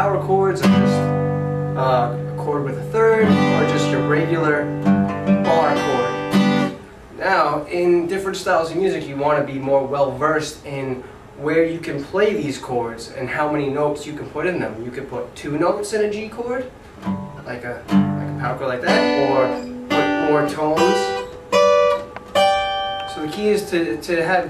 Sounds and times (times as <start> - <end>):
Speech: 0.0 - 1.1, 1.8 - 4.7, 5.4 - 6.1, 7.2 - 16.8, 17.4 - 21.3, 23.1 - 24.4
Strum: 0.0 - 7.0, 16.9 - 24.2
Acoustic guitar: 0.0 - 8.2, 16.6 - 24.4.